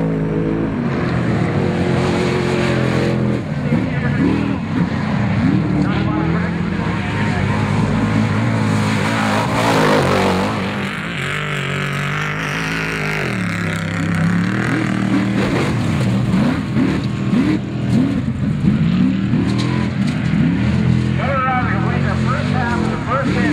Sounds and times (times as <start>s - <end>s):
Vehicle: 0.0s - 23.5s
Speech: 3.6s - 4.6s, 5.8s - 7.7s, 21.2s - 23.5s.